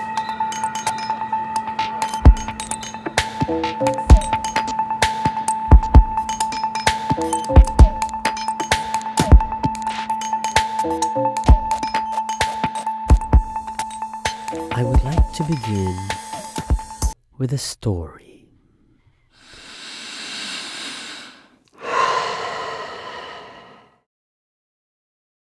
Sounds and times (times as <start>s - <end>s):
Music: 0.0s - 17.2s.